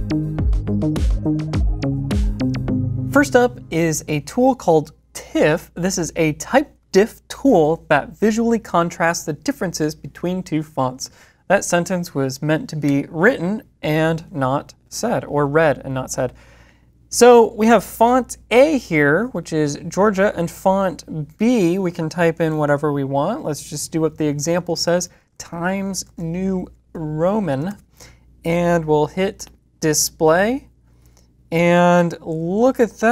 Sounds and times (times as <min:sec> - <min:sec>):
Speech: 0:03.2 - 0:16.4, 0:17.1 - 0:27.8, 0:28.4 - 0:30.7, 0:31.5 - 0:33.1.